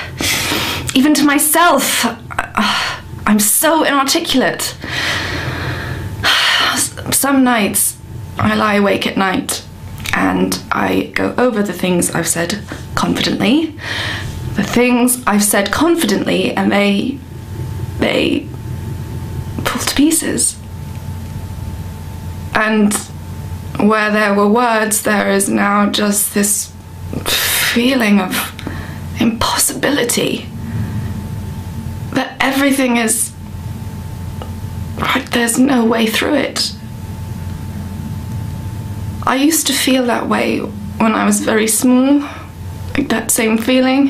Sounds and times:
Narration, monologue: 0:00.0 - 0:44.1.

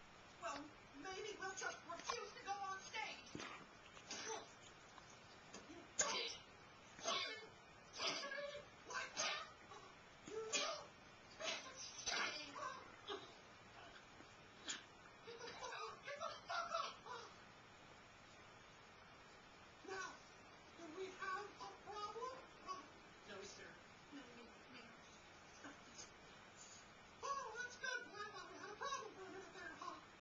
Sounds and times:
Speech: 0:00.4 - 0:03.4, 0:27.2 - 0:30.1.

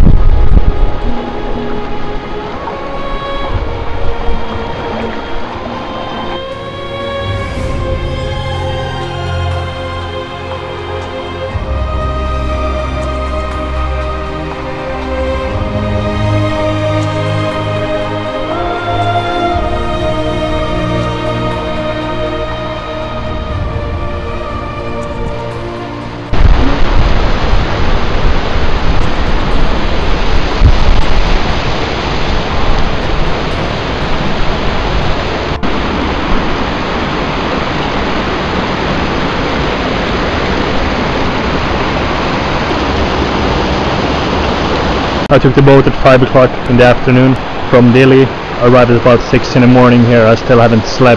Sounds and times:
Music: 0:00.0 - 0:36.9
Outside, rural or natural: 0:00.0 - 0:51.1.

